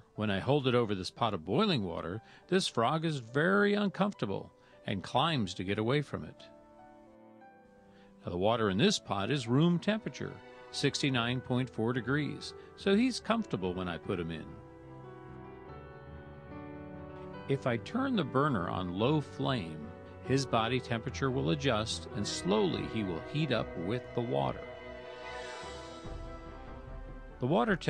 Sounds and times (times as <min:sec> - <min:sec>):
Music: 0:00.0 - 0:27.8
Speech: 0:00.2 - 0:06.5, 0:08.2 - 0:14.6, 0:17.5 - 0:24.6, 0:27.4 - 0:27.8.